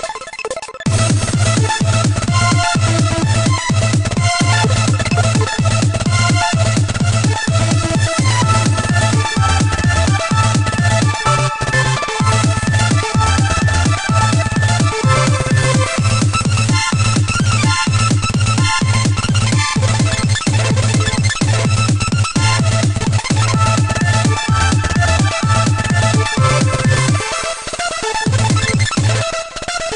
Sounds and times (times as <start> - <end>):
Soundtrack music: 0.0 - 29.8.